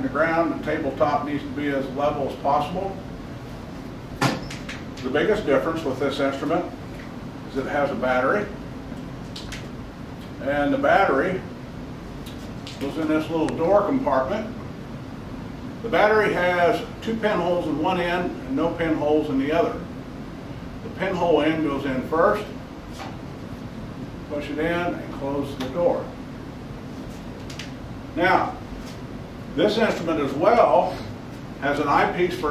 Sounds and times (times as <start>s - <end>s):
Speech: 0.0s - 3.0s, 5.0s - 6.8s, 7.5s - 8.6s, 10.4s - 11.5s, 12.8s - 14.6s, 15.8s - 19.9s, 20.8s - 22.6s, 24.3s - 26.2s, 28.2s - 28.6s, 29.6s - 32.5s.